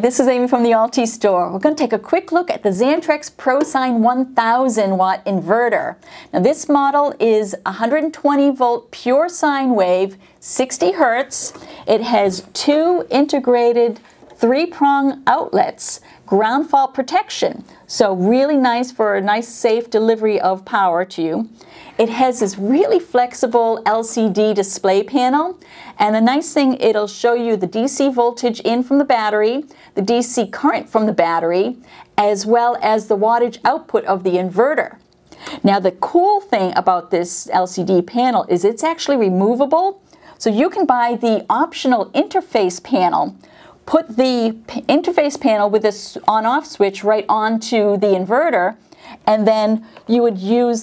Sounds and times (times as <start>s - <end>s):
Speech: 0.0s - 35.0s, 35.6s - 50.8s.